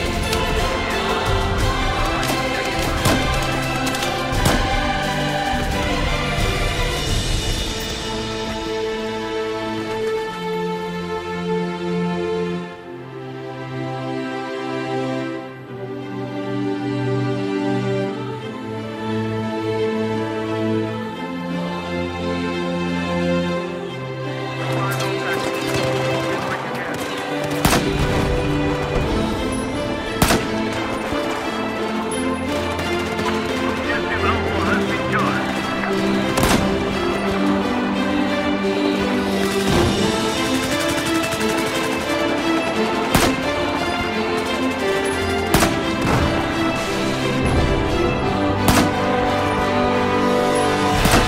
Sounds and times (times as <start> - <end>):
Gunshot, gunfire: 26.9 - 28.3, 30.2 - 30.7, 36.4 - 36.8, 43.1 - 43.4, 48.7 - 49.0, 51.0 - 51.2.